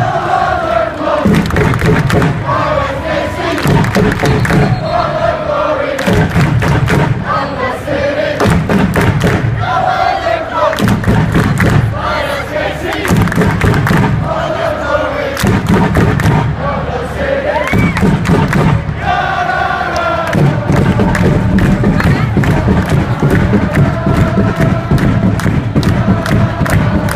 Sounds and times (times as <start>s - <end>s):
Chant: 0.0s - 8.5s, 9.6s - 27.1s
Outside, urban or manmade: 0.0s - 27.1s.